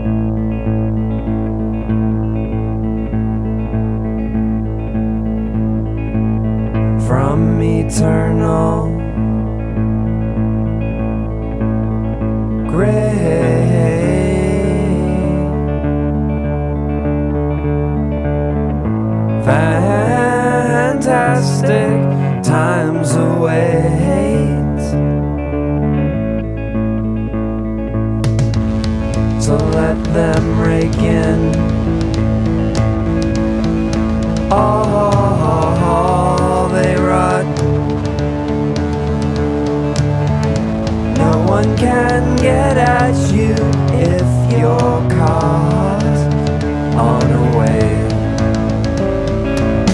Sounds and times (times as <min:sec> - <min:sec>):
Music: 0:00.0 - 0:49.9.